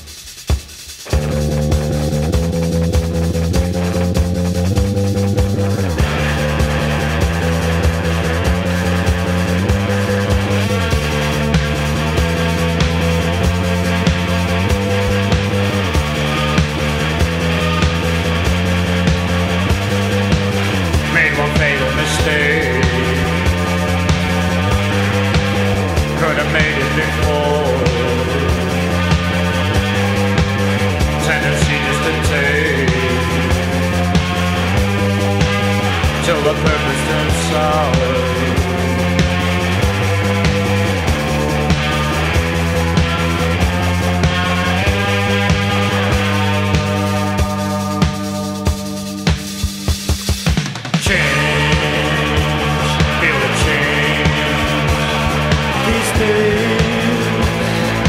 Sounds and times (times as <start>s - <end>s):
Music: 0.0s - 58.0s.